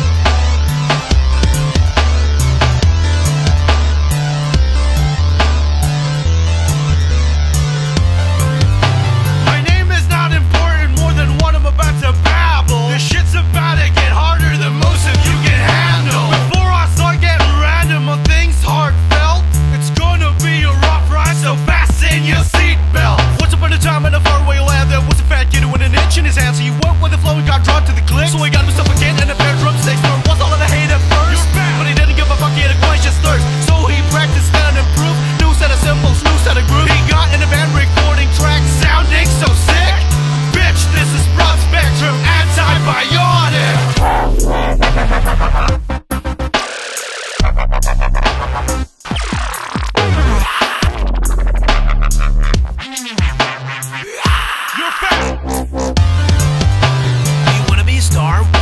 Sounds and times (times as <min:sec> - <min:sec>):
Music: 0:00.0 - 0:58.6.